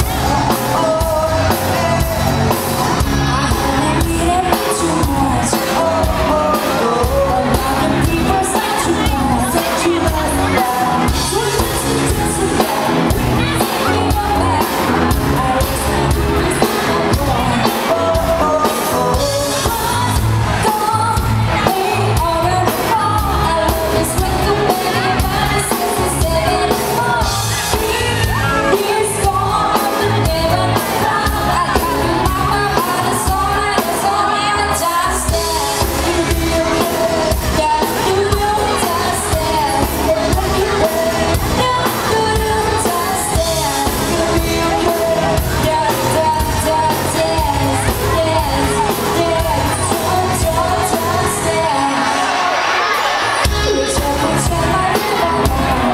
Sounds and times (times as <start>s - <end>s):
Dance music: 0.0s - 55.9s.